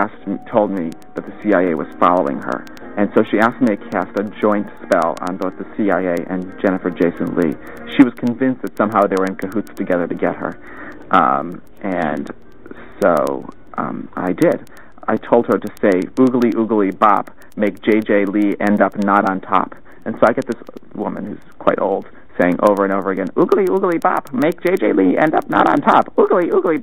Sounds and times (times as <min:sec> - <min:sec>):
Speech: 0:00.0 - 0:12.3, 0:13.0 - 0:26.8.